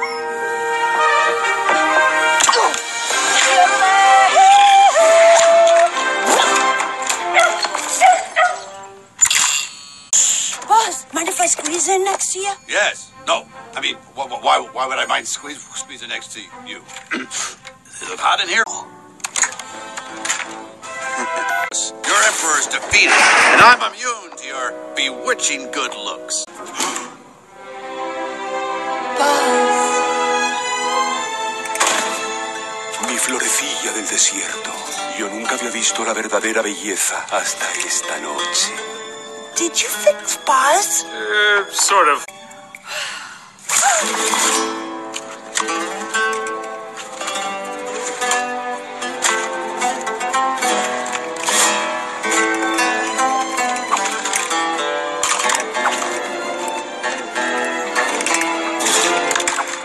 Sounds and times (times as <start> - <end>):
Music: 0.0 - 59.8.